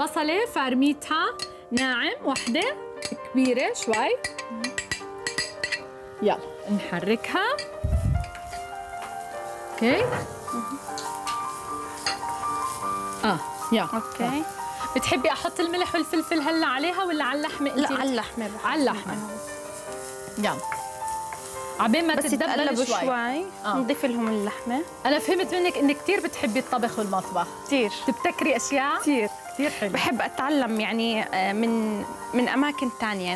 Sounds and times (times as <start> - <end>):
Music: 0.0 - 33.3.